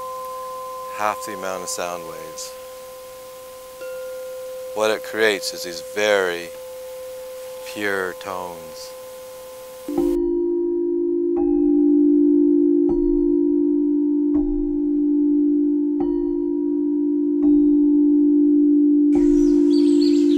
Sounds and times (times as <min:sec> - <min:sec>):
Chime: 0:00.0 - 0:14.5, 0:19.2 - 0:20.3
Speech: 0:00.9 - 0:02.6, 0:04.8 - 0:06.6, 0:07.6 - 0:08.9.